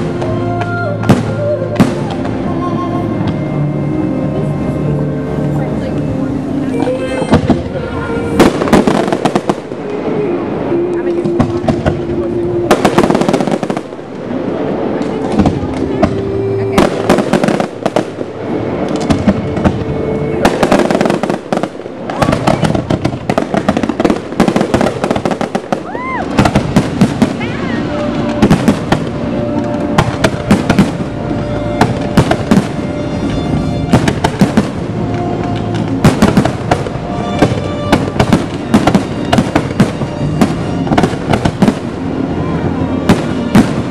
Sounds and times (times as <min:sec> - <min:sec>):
Fireworks: 0:00.0 - 0:03.6, 0:05.7 - 0:43.9
Music: 0:00.0 - 0:43.9
Outside, urban or manmade: 0:00.0 - 0:43.9.